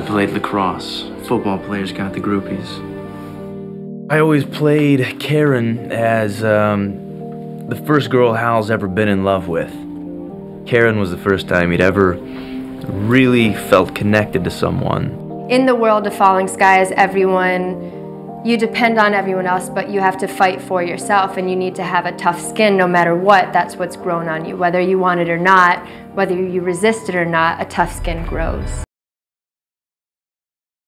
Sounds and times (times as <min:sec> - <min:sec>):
Music: 0:00.0 - 0:28.9.